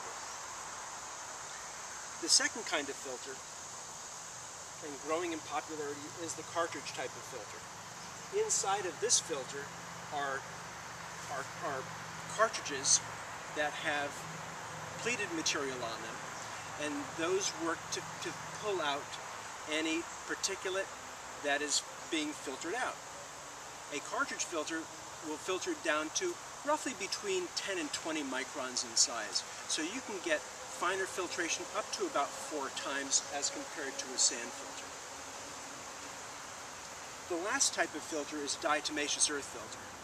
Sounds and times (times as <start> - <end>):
Outside, rural or natural: 0.0 - 40.0
Speech: 2.2 - 3.4, 4.8 - 7.6, 8.3 - 10.4, 11.3 - 13.0, 13.6 - 14.2, 15.0 - 16.2, 16.8 - 23.0, 23.9 - 34.9, 37.3 - 39.8.